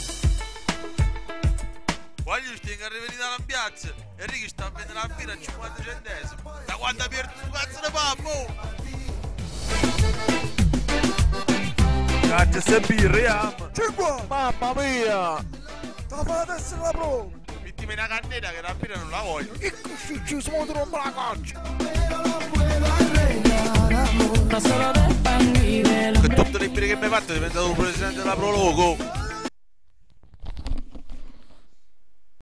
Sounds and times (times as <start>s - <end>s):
Music: 0.0s - 29.5s
Speech: 2.3s - 8.8s, 12.3s - 15.4s, 16.1s - 21.5s, 26.1s - 29.1s.